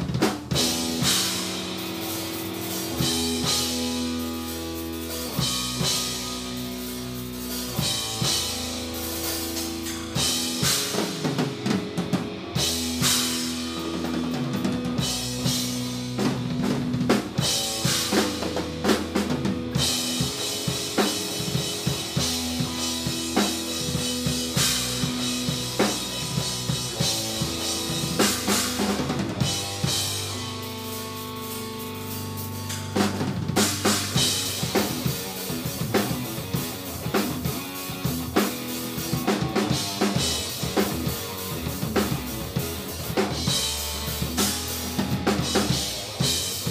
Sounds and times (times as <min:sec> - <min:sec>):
Drum kit: 0:00.0 - 0:46.7
Drum roll: 0:00.0 - 0:46.7.